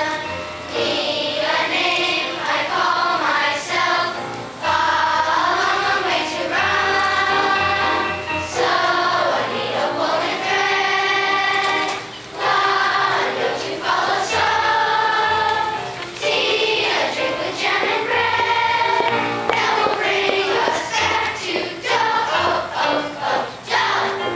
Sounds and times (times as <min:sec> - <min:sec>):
Choir: 0:00.0 - 0:24.3.